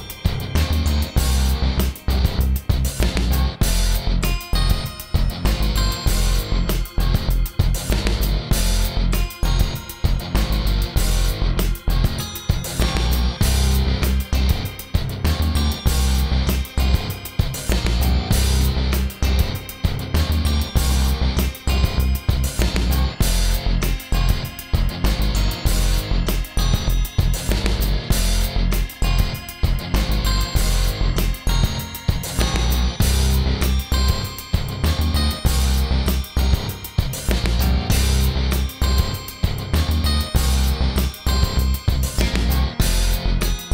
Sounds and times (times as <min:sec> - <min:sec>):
Music: 0:00.0 - 0:43.7.